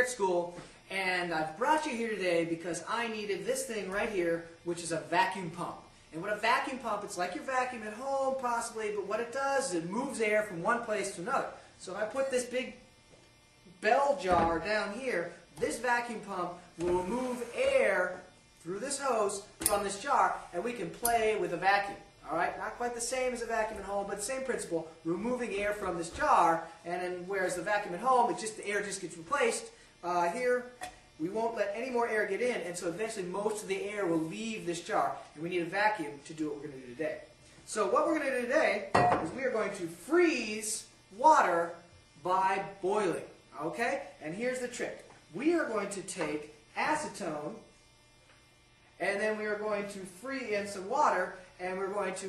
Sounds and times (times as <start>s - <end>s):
Speech: 0.0s - 12.8s, 13.7s - 47.7s, 49.0s - 52.2s.